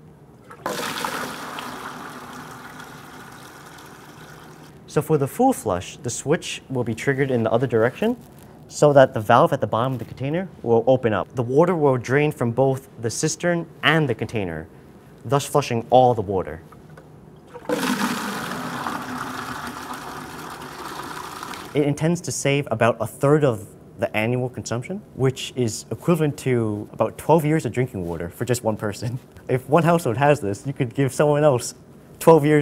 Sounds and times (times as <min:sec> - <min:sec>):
Water: 0:00.4 - 0:04.7, 0:17.4 - 0:21.8
Toilet flush: 0:00.5 - 0:04.7, 0:17.5 - 0:21.8.